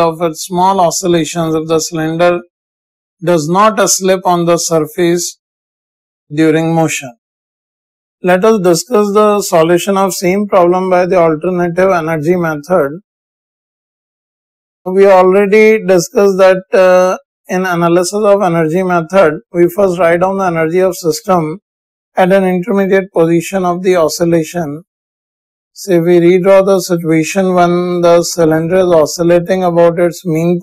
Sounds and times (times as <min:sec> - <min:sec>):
Speech: 0:00.0 - 0:02.5, 0:03.2 - 0:05.4, 0:06.3 - 0:07.2, 0:08.2 - 0:13.0, 0:14.9 - 0:21.6, 0:22.2 - 0:24.9, 0:25.8 - 0:30.6.